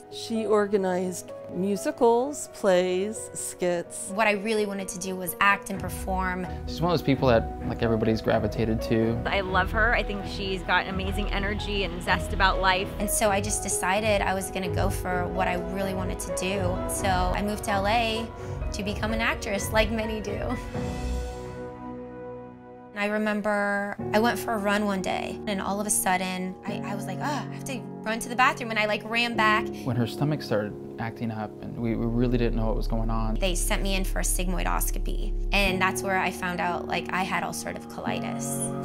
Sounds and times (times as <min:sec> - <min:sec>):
Music: 0:00.0 - 0:38.8
Speech: 0:00.2 - 0:18.2, 0:28.2 - 0:38.6.